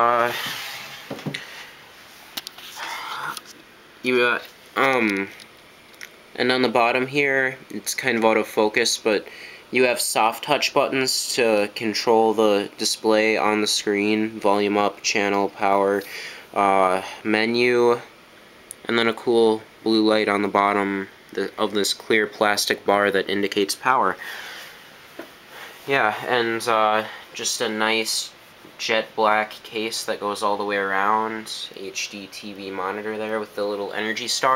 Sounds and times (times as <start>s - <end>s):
Speech: 0.0s - 0.4s, 4.0s - 5.4s, 6.4s - 18.1s, 18.8s - 24.2s, 25.9s - 34.5s.